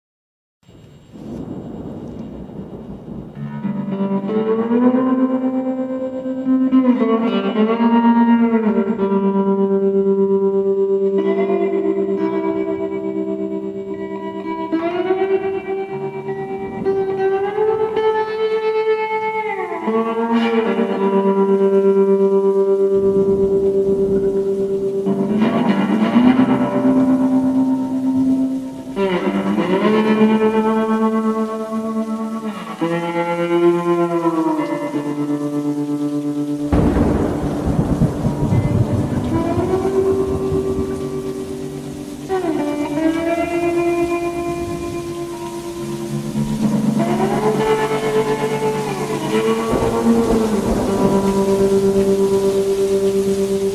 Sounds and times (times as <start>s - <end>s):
Rain: 0.6s - 53.7s
Music: 0.7s - 53.7s.